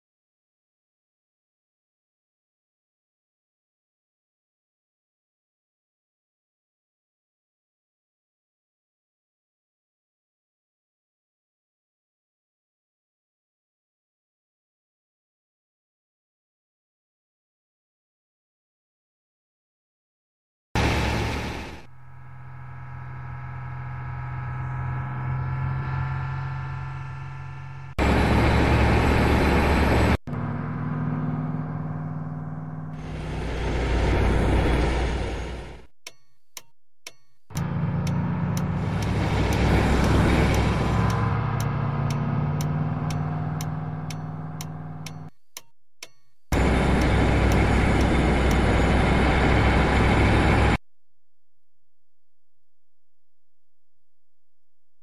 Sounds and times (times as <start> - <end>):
Vehicle: 20.8 - 35.9, 37.5 - 45.6, 46.5 - 50.8.